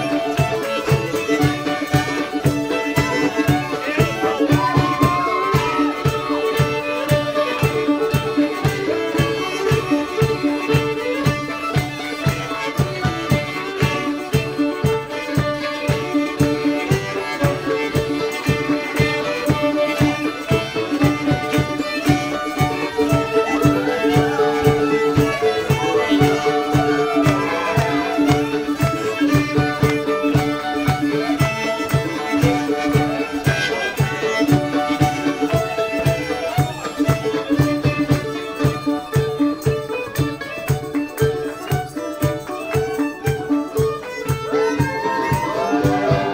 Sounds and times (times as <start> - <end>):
Violin, fiddle: 0.0 - 46.3.